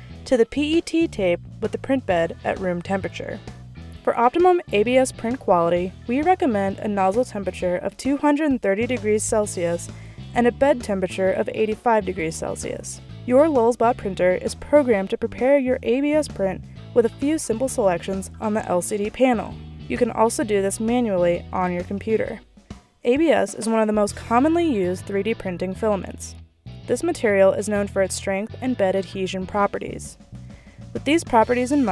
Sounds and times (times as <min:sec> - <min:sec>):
Music: 0:00.0 - 0:31.9
Speech: 0:00.3 - 0:03.4, 0:04.1 - 0:22.4, 0:23.1 - 0:30.2, 0:31.0 - 0:31.9.